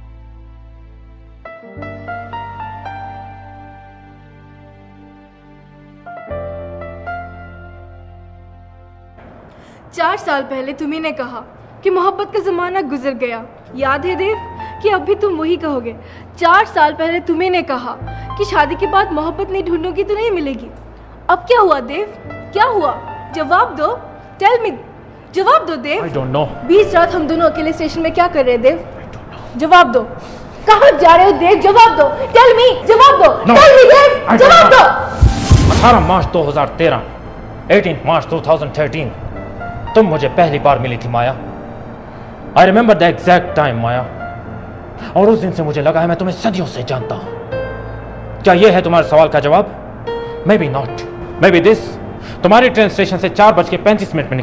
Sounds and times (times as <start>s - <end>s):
Music: 0.0s - 54.4s.